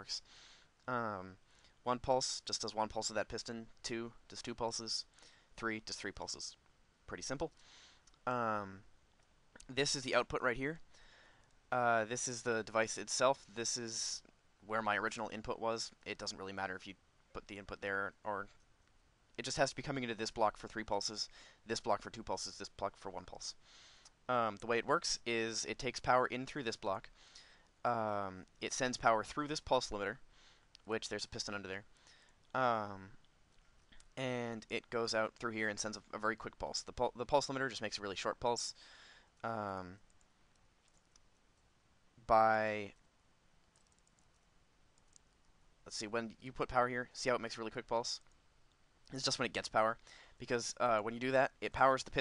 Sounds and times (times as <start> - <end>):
Speech: 0.0 - 7.6, 8.2 - 8.9, 9.6 - 10.8, 11.7 - 18.6, 19.4 - 23.6, 24.3 - 27.1, 27.8 - 30.2, 30.8 - 31.9, 32.5 - 33.2, 34.2 - 38.8, 39.4 - 40.0, 42.2 - 43.0, 45.9 - 48.3, 49.1 - 52.2.